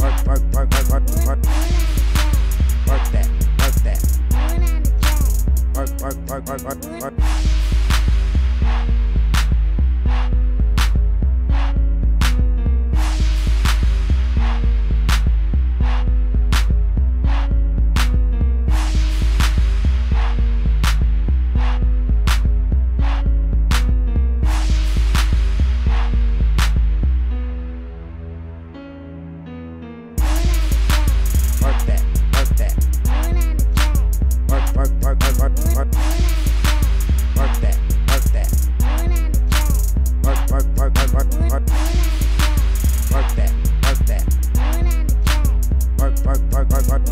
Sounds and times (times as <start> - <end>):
Dance music: 0.0 - 27.5, 30.2 - 47.1.